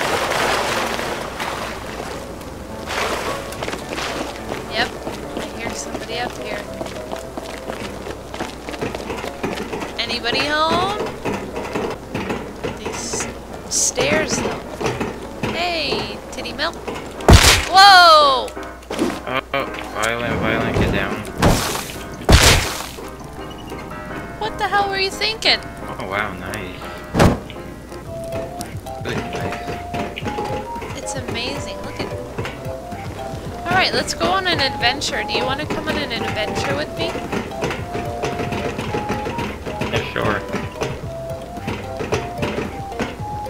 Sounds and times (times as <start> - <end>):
Music: 0.0 - 43.4.